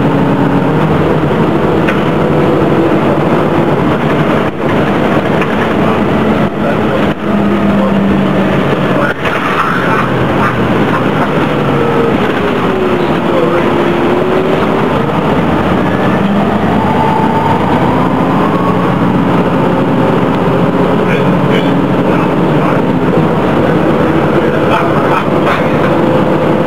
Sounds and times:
Bus: 0.0 - 26.6.

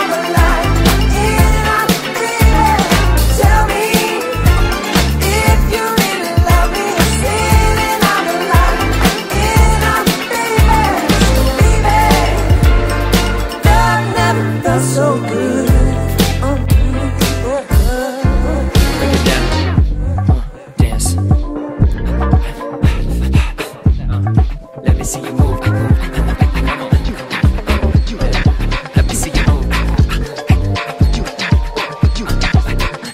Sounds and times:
Soul music: 0.0 - 33.1.

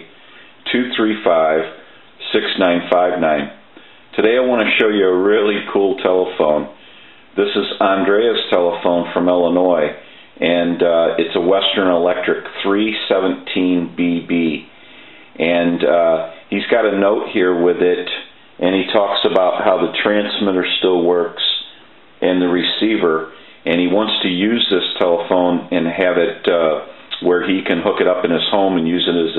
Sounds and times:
Speech: 0.0 - 6.8, 7.4 - 14.7, 15.4 - 29.3.

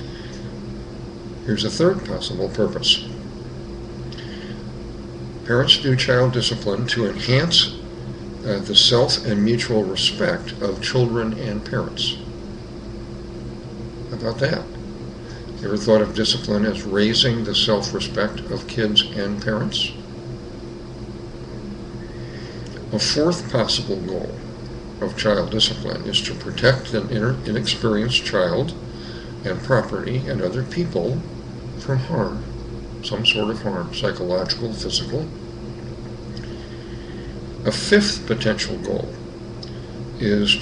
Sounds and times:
Air conditioning: 0.0 - 40.6
Speech: 1.4 - 3.2, 5.4 - 7.8, 8.4 - 12.3, 14.1 - 14.8, 15.6 - 20.0, 22.8 - 24.4, 25.0 - 28.8, 29.4 - 35.4, 37.6 - 39.2, 40.2 - 40.6.

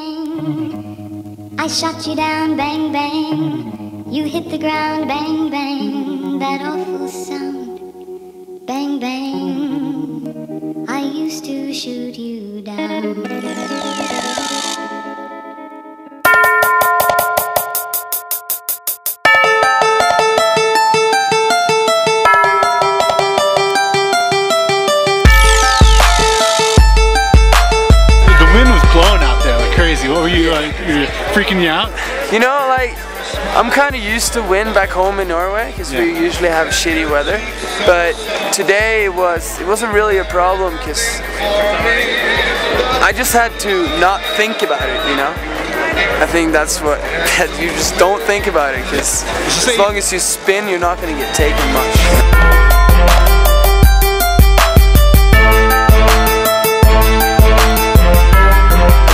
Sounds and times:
Music: 0.0 - 59.1
Speech: 28.3 - 52.3.

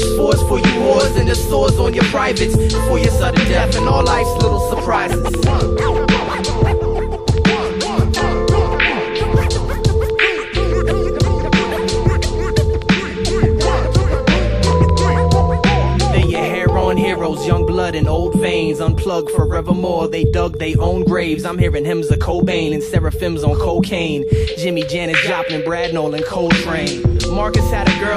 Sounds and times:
Hip hop music: 0.0 - 28.1
Singing: 0.0 - 28.1.

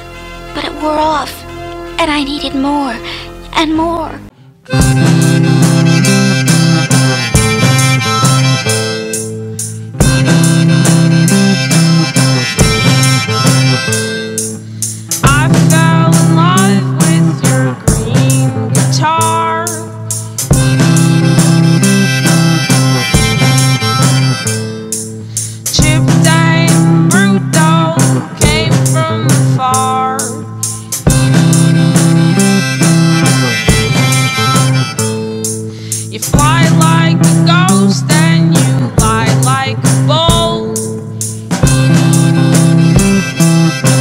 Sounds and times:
Strum: 0.0 - 44.0.

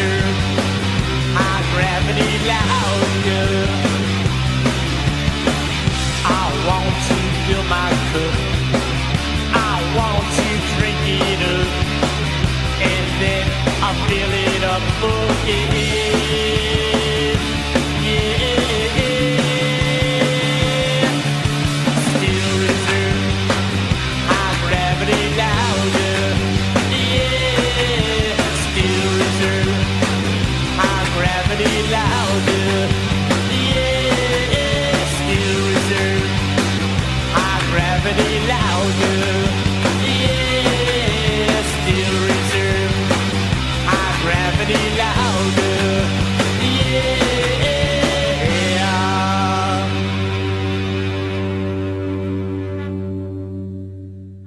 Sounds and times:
Music: 0.0 - 54.4.

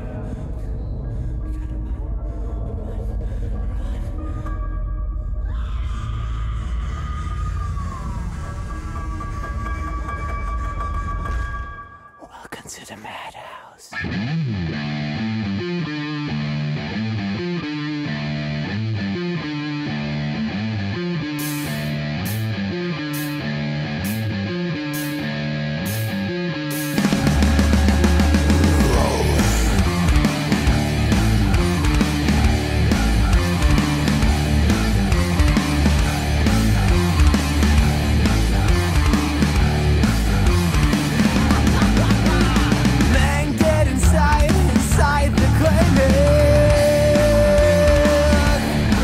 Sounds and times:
Music: 0.0 - 13.0, 13.9 - 49.0.

